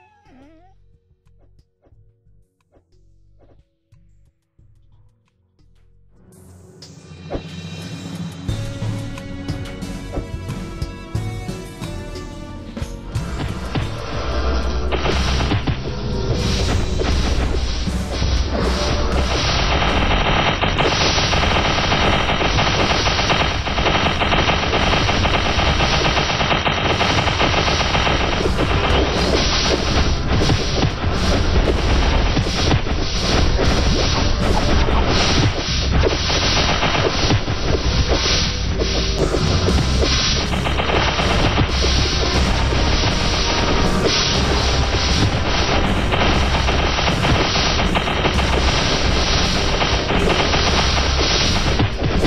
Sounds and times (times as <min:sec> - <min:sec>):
Music: 0:00.0 - 0:52.2.